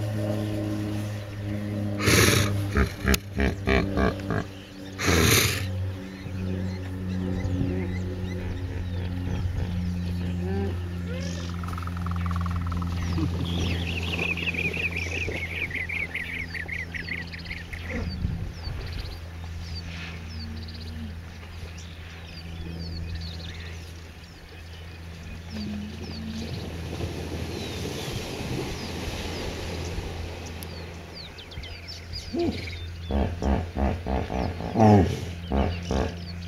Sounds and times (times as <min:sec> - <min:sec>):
Outside, rural or natural: 0:00.0 - 0:36.4.